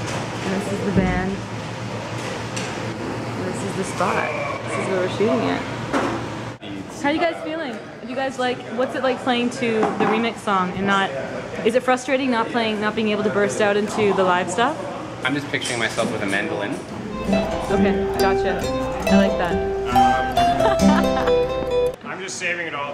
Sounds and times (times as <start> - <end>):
Music: 17.1 - 22.0.